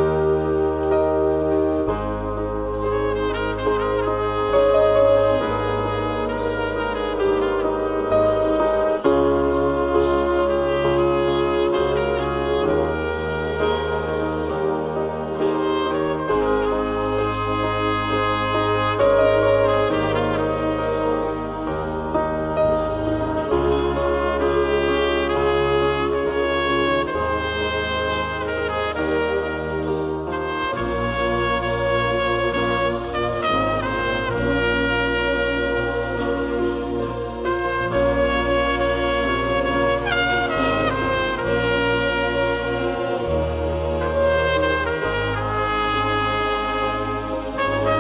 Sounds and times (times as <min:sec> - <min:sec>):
French horn: 0:00.0 - 0:48.0
Trombone: 0:00.0 - 0:48.0
Trumpet: 0:00.0 - 0:48.0.